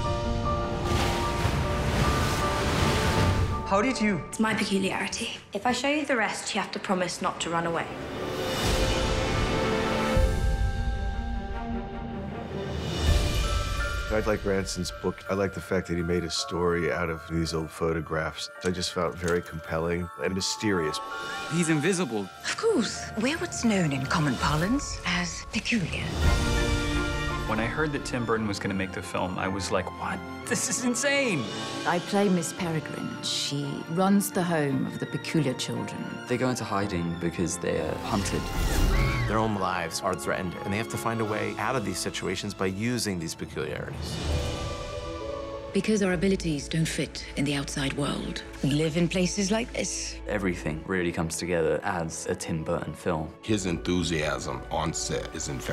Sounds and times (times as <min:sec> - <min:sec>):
Music: 0:00.0 - 0:55.7.